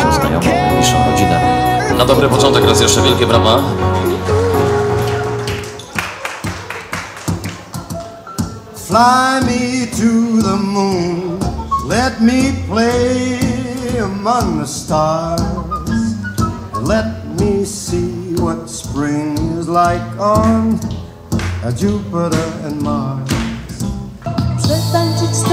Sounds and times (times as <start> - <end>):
Music: 0.0 - 25.5.